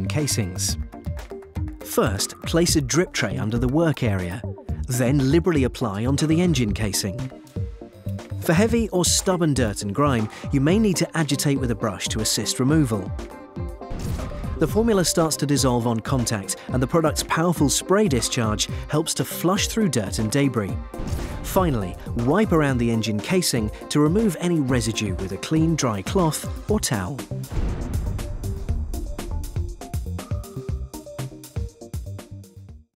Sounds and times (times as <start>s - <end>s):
Speech: 0.0s - 0.8s, 1.9s - 7.3s, 8.4s - 13.1s, 14.6s - 20.8s, 21.5s - 27.3s
Music: 0.0s - 32.9s.